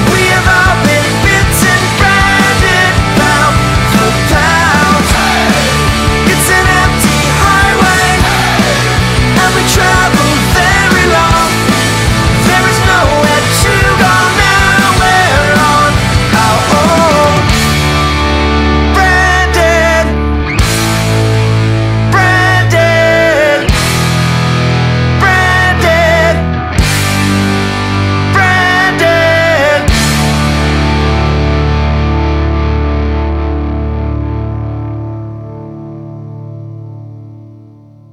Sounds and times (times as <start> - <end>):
Music: 0.0 - 38.1.